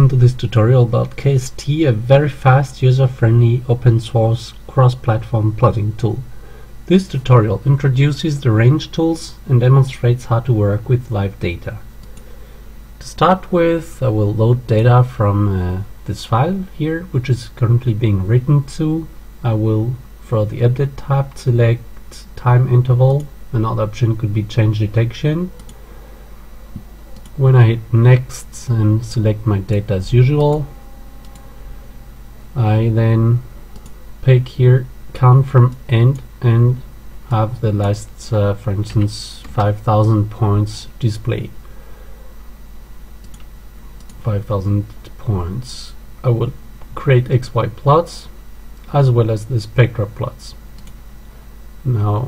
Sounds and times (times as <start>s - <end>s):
Speech: 0.0s - 11.9s, 13.0s - 25.7s, 27.4s - 30.7s, 32.6s - 33.5s, 34.2s - 41.6s, 44.2s - 50.6s, 51.8s - 52.2s.